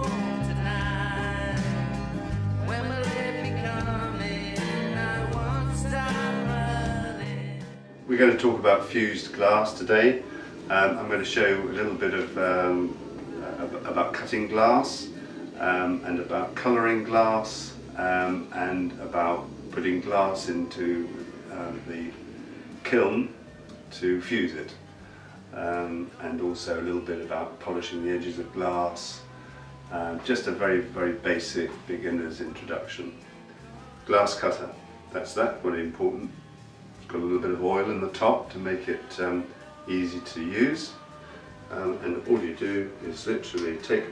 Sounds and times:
Speech: 8.1s - 22.2s, 22.8s - 24.8s, 25.5s - 29.3s, 29.9s - 33.2s, 34.0s - 36.4s, 37.0s - 41.0s, 41.7s - 44.1s.

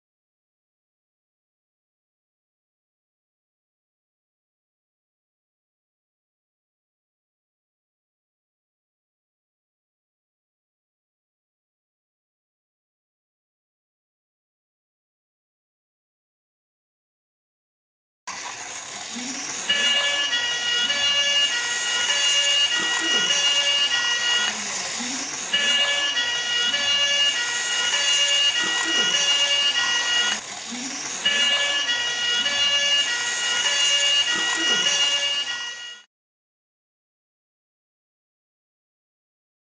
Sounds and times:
Fire engine, fire truck (siren): 19.1s - 36.1s.

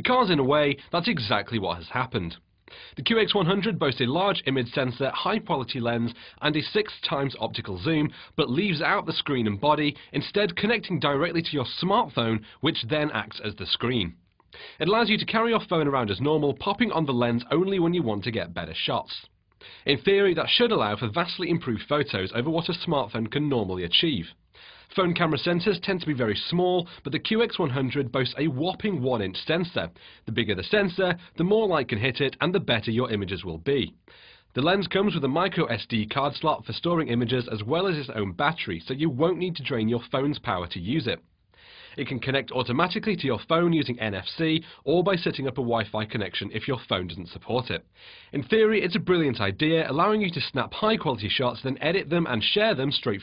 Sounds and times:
Speech: 0.0s - 2.4s, 3.0s - 14.2s, 14.8s - 19.3s, 19.9s - 34.0s, 34.6s - 41.2s, 42.0s - 53.2s.

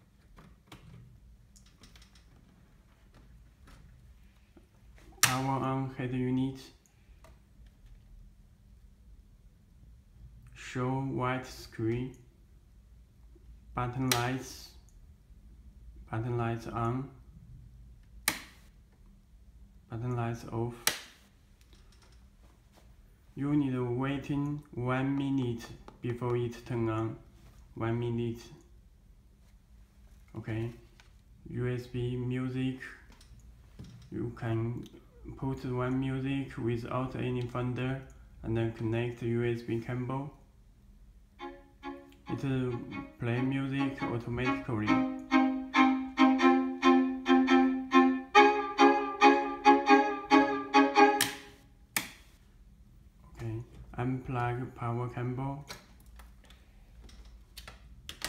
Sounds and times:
Speech: 5.2s - 6.8s, 10.5s - 12.3s, 13.8s - 14.9s, 16.1s - 17.3s, 19.9s - 20.9s, 23.4s - 28.7s, 30.3s - 33.1s, 34.1s - 40.5s, 42.3s - 45.2s, 53.4s - 55.7s.

